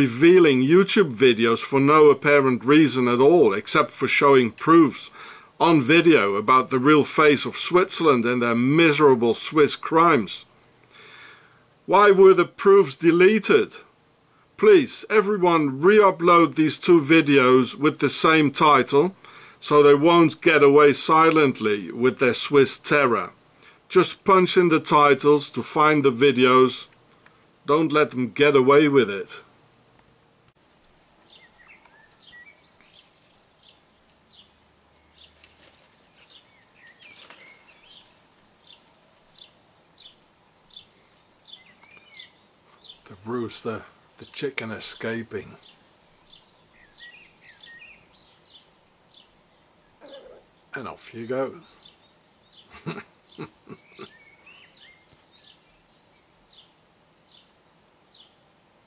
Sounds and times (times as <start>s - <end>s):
Chirp, tweet: 31.0s - 35.4s, 36.1s - 43.1s, 45.6s - 50.7s, 51.6s - 58.8s.